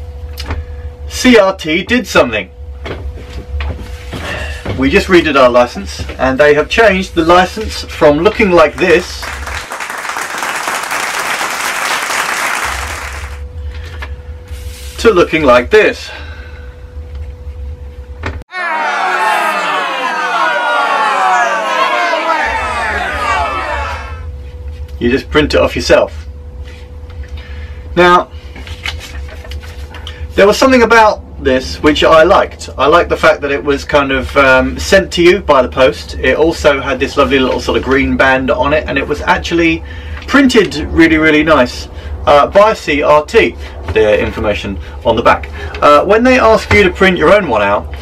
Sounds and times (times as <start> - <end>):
Crowd: 8.6 - 13.4, 18.5 - 24.3.